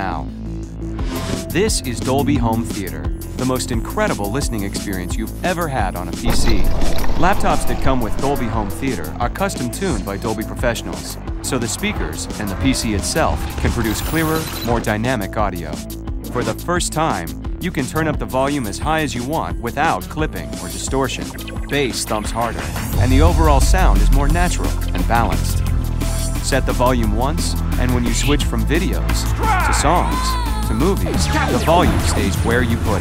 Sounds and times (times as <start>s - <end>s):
Speech: 0.0s - 0.3s, 1.5s - 25.6s, 26.4s - 33.0s
Music: 0.0s - 33.0s.